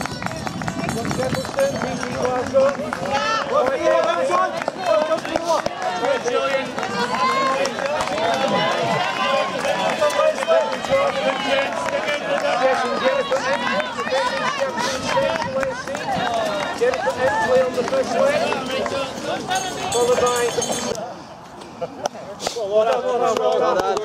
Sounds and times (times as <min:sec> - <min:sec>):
Speech: 0:00.0 - 0:21.1
Outside, rural or natural: 0:00.0 - 0:24.0
Run: 0:00.0 - 0:24.0.